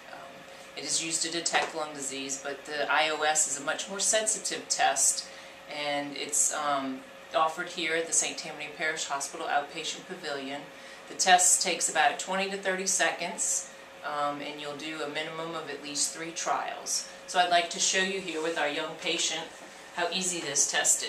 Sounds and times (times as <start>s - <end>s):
Speech: 0.0s - 21.0s.